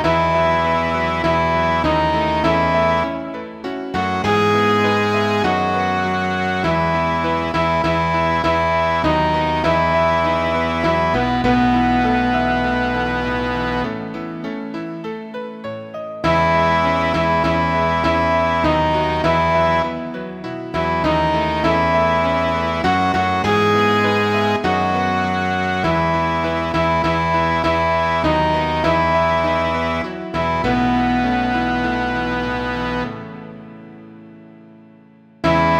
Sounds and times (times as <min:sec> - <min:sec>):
Tender music: 0:00.0 - 0:35.7.